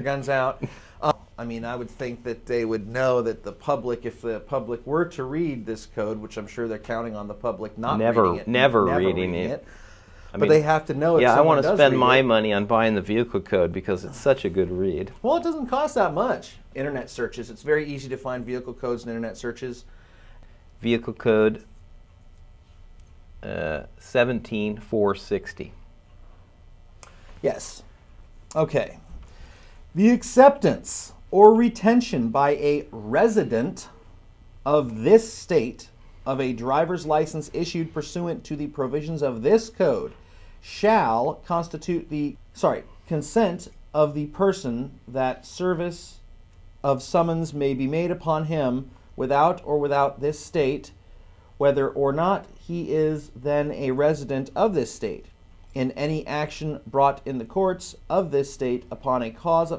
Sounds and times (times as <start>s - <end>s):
Speech: 0.0s - 9.7s, 10.3s - 19.9s, 20.8s - 21.7s, 23.4s - 25.8s, 27.4s - 27.9s, 28.5s - 29.1s, 30.0s - 34.0s, 34.7s - 46.2s, 46.8s - 51.0s, 51.6s - 59.7s.